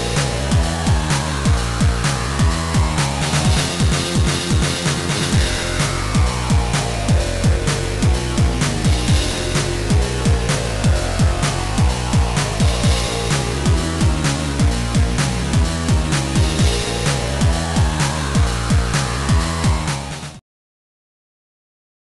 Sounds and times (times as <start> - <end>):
Exciting music: 0.0 - 20.4
Video game music: 0.0 - 20.4.